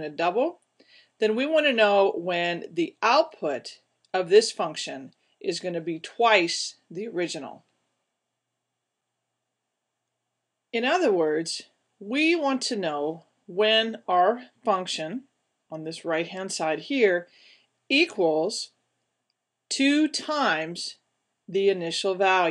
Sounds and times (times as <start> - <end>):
Speech: 0.0 - 0.6, 1.2 - 7.7, 10.8 - 17.3, 17.9 - 18.8, 19.7 - 22.5.